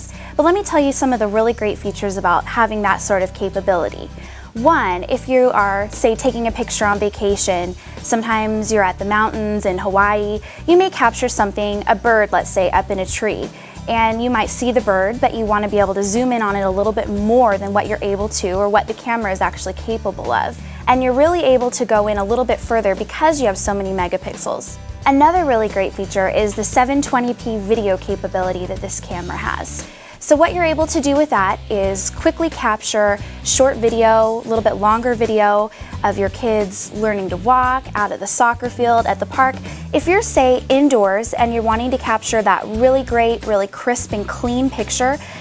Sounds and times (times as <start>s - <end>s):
Speech: 0.0s - 45.2s
Music: 0.0s - 45.4s.